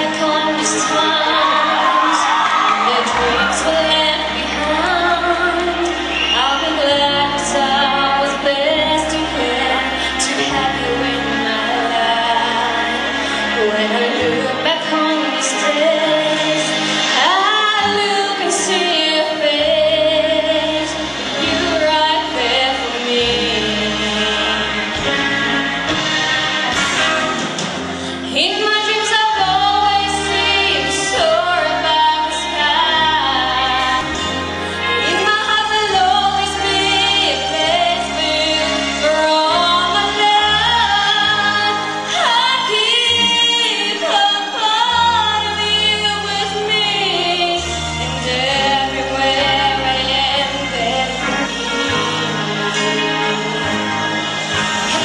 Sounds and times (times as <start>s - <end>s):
Female singing: 0.0s - 25.2s, 28.2s - 53.6s
Music: 0.0s - 55.0s.